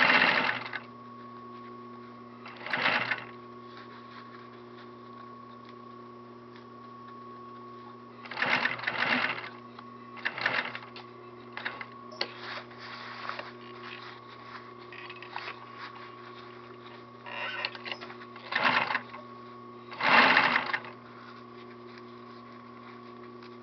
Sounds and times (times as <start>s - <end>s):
Sewing machine: 0.0s - 0.9s, 2.5s - 3.3s, 8.2s - 9.6s, 10.2s - 10.9s, 11.6s - 12.0s, 17.3s - 19.2s, 19.9s - 21.0s.